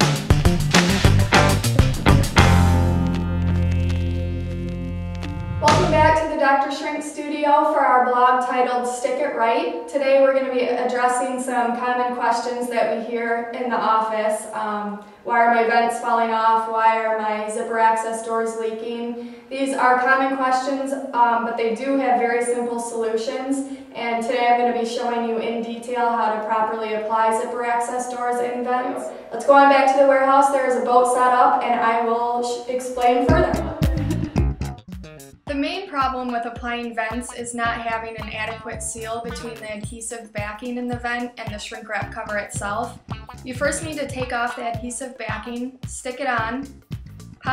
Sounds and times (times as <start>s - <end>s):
Speech: 5.6s - 34.2s, 35.5s - 46.7s.